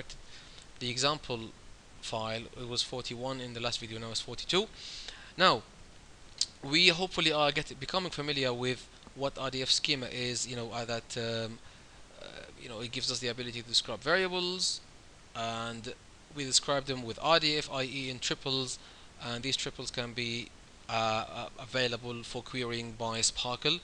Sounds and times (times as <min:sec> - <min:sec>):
Speech: 0:00.8 - 0:04.7, 0:05.4 - 0:05.7, 0:06.4 - 0:11.6, 0:12.2 - 0:14.8, 0:15.4 - 0:23.8.